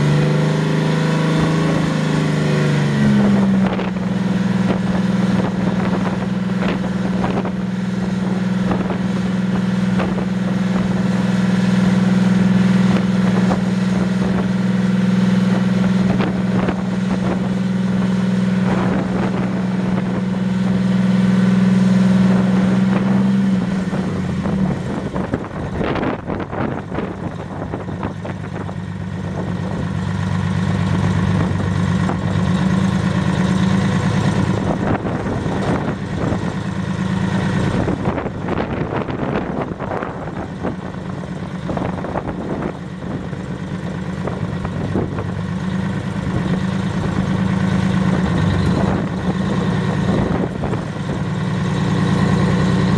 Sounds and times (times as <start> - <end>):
Truck: 0.0 - 52.9.